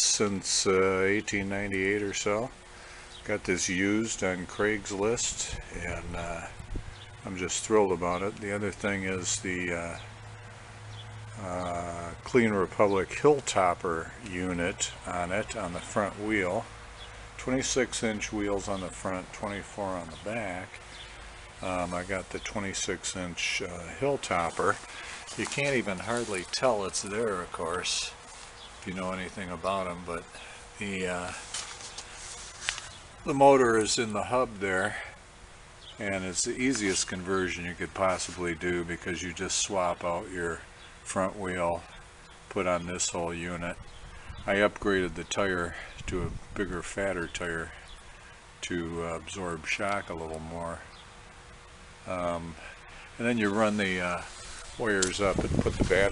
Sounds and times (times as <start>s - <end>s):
Speech: 0.0s - 2.6s, 3.2s - 6.6s, 7.2s - 10.1s, 11.3s - 16.7s, 17.4s - 20.8s, 21.6s - 28.2s, 28.8s - 31.5s, 33.3s - 35.2s, 36.0s - 43.8s, 44.5s - 47.8s, 48.6s - 50.9s, 52.0s - 56.1s.